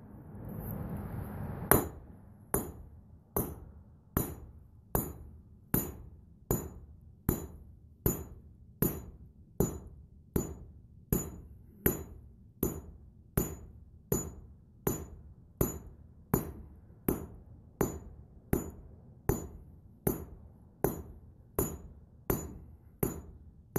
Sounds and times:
Hammer: 1.7s - 23.7s.

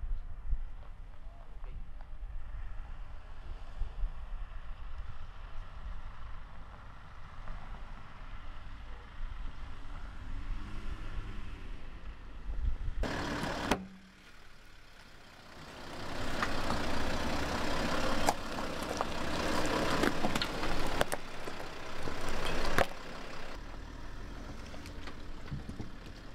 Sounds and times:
Car: 0.0s - 26.3s.

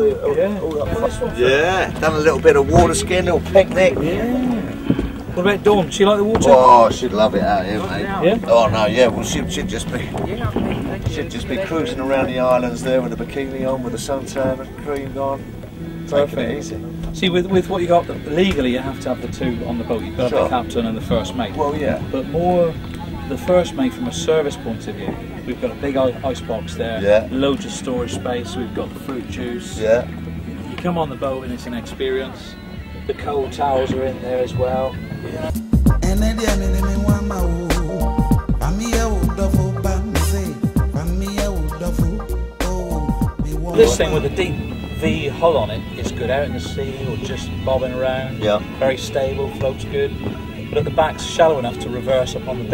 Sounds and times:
Speech: 5.3s - 15.4s, 16.1s - 35.6s, 43.5s - 52.7s.

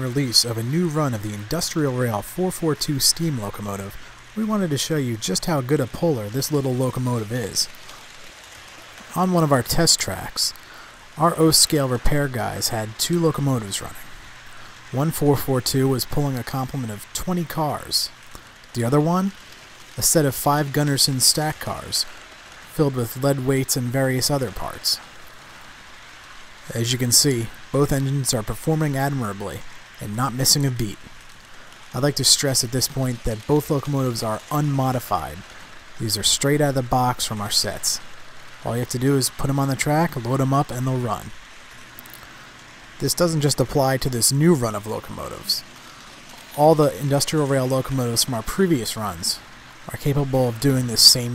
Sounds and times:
Speech: 0.0s - 7.8s, 9.1s - 10.6s, 11.2s - 14.1s, 14.9s - 19.4s, 20.0s - 22.1s, 22.7s - 25.0s, 26.6s - 31.1s, 31.9s - 41.4s, 43.0s - 45.7s, 46.5s - 51.3s.

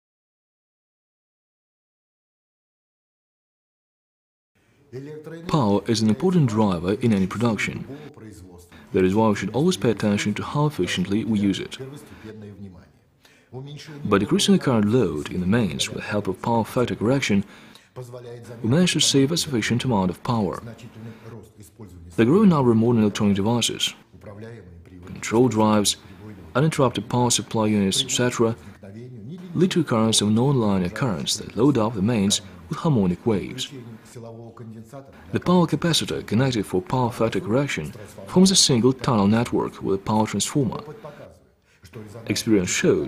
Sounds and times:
Speech: 4.9s - 43.0s.

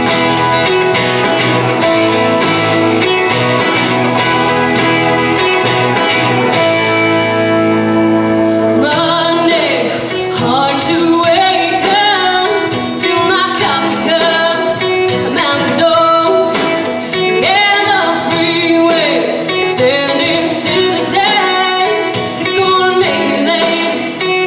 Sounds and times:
Music: 0.0s - 24.4s
Female singing: 8.8s - 16.7s, 17.3s - 24.4s.

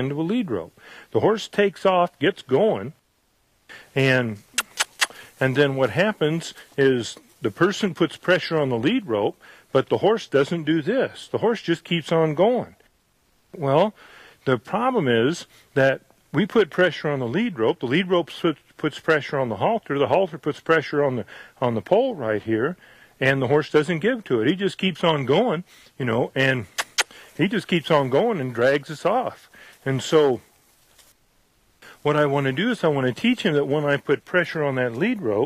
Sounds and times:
Speech: 0.0s - 3.0s, 3.7s - 12.9s, 13.6s - 26.8s, 27.4s - 30.5s, 31.8s - 35.4s.

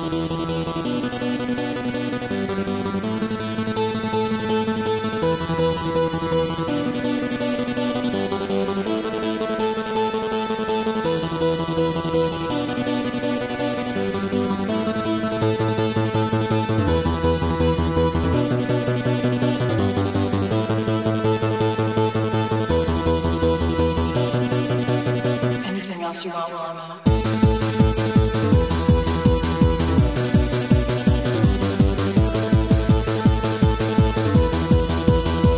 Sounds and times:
Music: 0.0s - 35.5s.

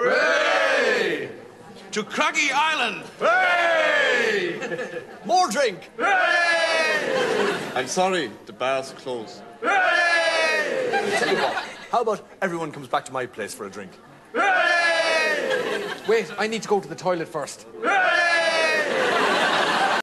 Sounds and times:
Speech: 16.0s - 17.7s.

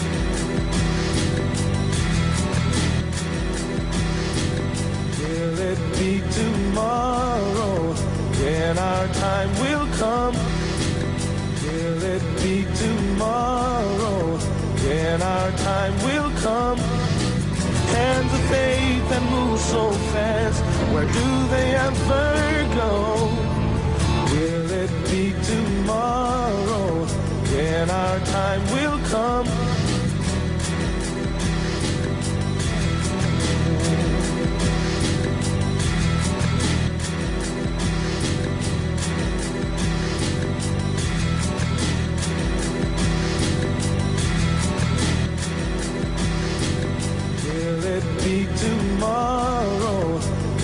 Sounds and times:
Music: 0.0s - 50.6s.

